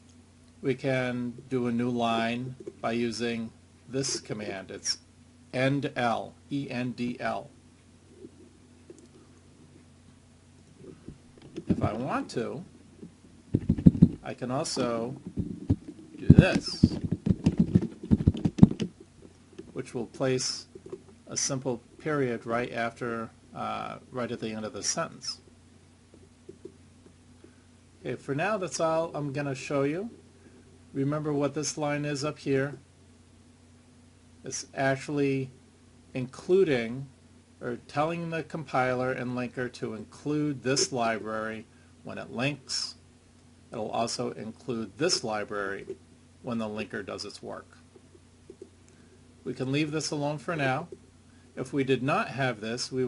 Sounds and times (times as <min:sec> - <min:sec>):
Inside, small room: 0:00.0 - 0:53.0
Speech: 0:00.6 - 0:07.5, 0:11.7 - 0:12.7, 0:14.2 - 0:15.2, 0:16.2 - 0:17.0, 0:19.7 - 0:20.7, 0:21.3 - 0:25.5, 0:28.0 - 0:30.2, 0:31.0 - 0:32.8, 0:34.4 - 0:35.6, 0:36.2 - 0:43.0, 0:43.7 - 0:47.8, 0:49.4 - 0:51.0, 0:51.6 - 0:53.0.